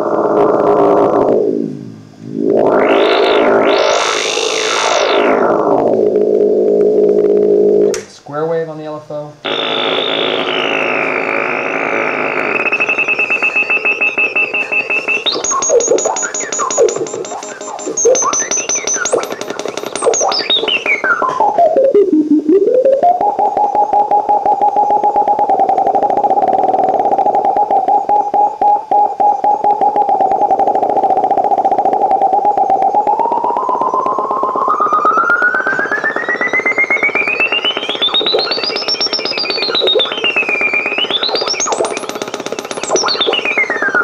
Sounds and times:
Synthesizer: 0:00.0 - 0:08.2, 0:09.4 - 0:44.0
Speech: 0:08.0 - 0:09.4.

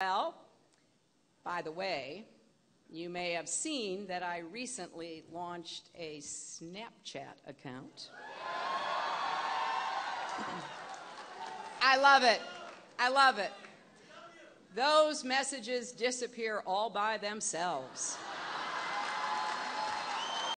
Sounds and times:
Speech: 0:01.5 - 0:02.3, 0:02.9 - 0:08.1, 0:11.8 - 0:18.2.

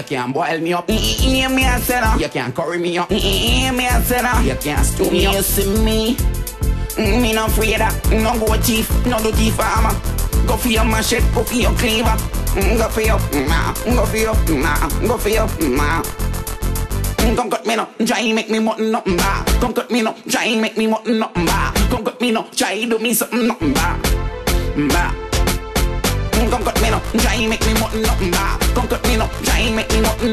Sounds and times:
Music: 0:00.0 - 0:30.3.

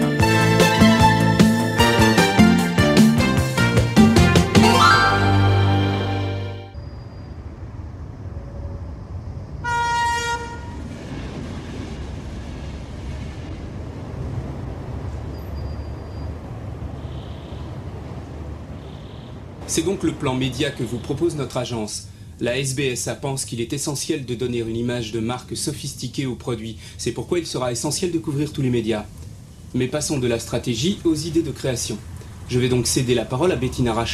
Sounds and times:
Speech: 0:19.6 - 0:29.1, 0:29.8 - 0:34.1.

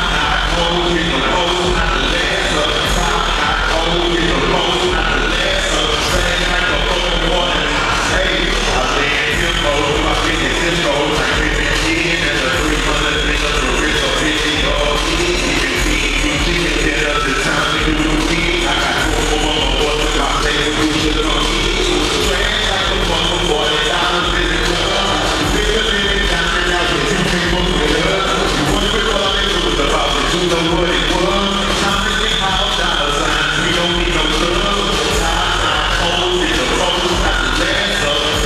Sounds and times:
Music: 0:00.0 - 0:38.4.

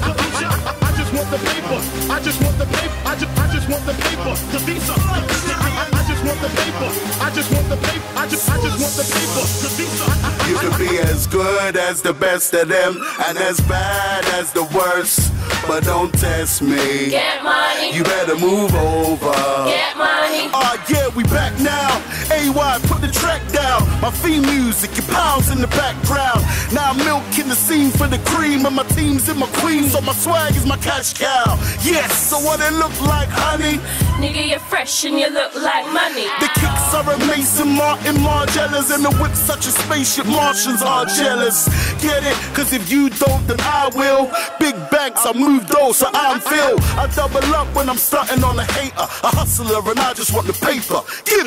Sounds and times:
Music: 0:00.0 - 0:51.4.

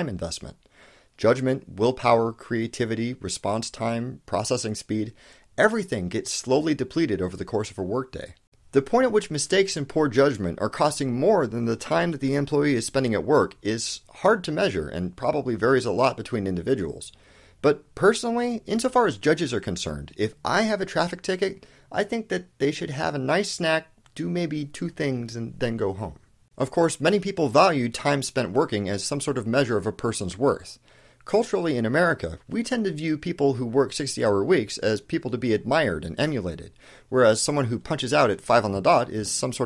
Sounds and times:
Speech: 0:00.0 - 0:00.6, 0:01.2 - 0:39.6.

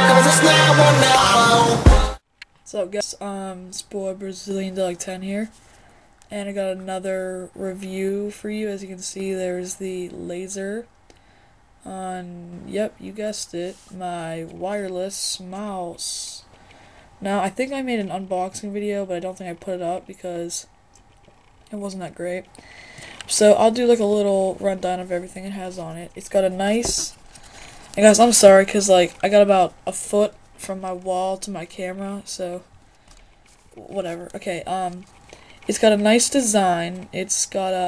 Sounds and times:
Speech: 0:02.7 - 0:05.6, 0:06.3 - 0:10.9, 0:11.8 - 0:16.5, 0:17.2 - 0:20.7, 0:21.7 - 0:22.5, 0:23.3 - 0:27.2, 0:28.0 - 0:32.7, 0:33.8 - 0:35.1, 0:35.7 - 0:37.8.

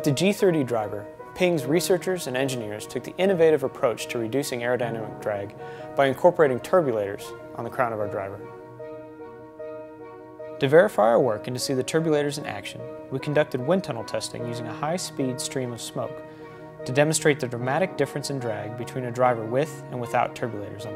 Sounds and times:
Speech: 0:00.0 - 0:08.4, 0:10.6 - 0:16.2, 0:16.9 - 0:20.9
Music: 0:00.0 - 0:20.9.

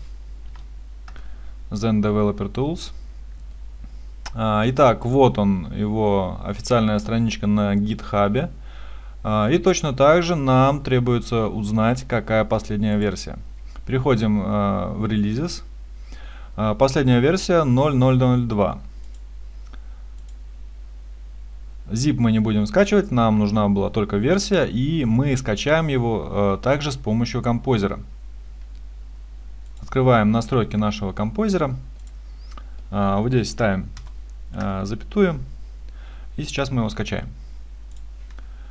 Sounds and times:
Speech: 0:01.7 - 0:03.0, 0:04.3 - 0:08.6, 0:09.2 - 0:15.7, 0:16.6 - 0:18.9, 0:21.9 - 0:28.1, 0:29.8 - 0:31.9, 0:32.9 - 0:35.5, 0:36.4 - 0:37.4.

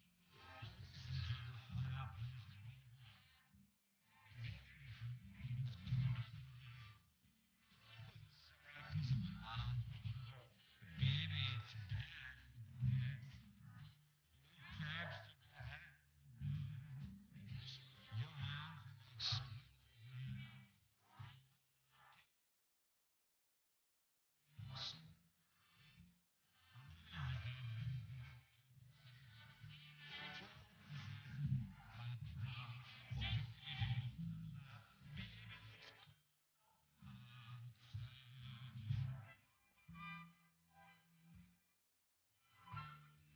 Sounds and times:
Speech: 0:00.2 - 0:03.3, 0:07.8 - 0:20.8, 0:26.8 - 0:28.5, 0:29.4 - 0:36.0.

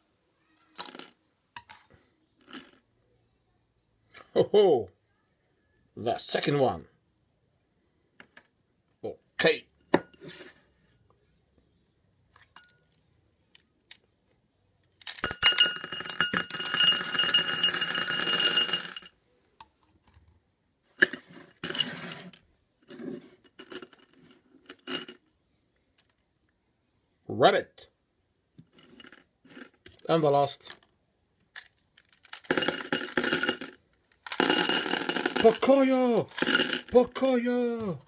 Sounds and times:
Inside, small room: 0:00.0 - 0:38.0
Speech: 0:06.0 - 0:06.9, 0:09.0 - 0:09.7, 0:27.3 - 0:27.9, 0:30.0 - 0:30.8, 0:35.4 - 0:36.3, 0:36.9 - 0:38.0.

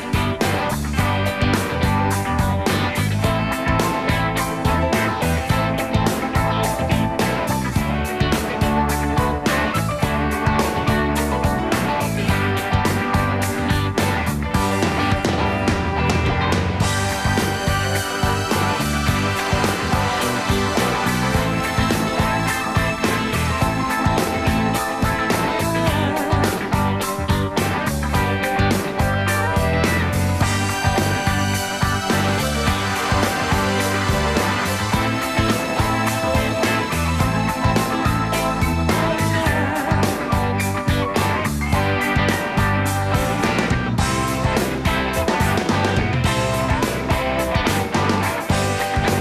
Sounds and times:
Music: 0:00.0 - 0:49.2.

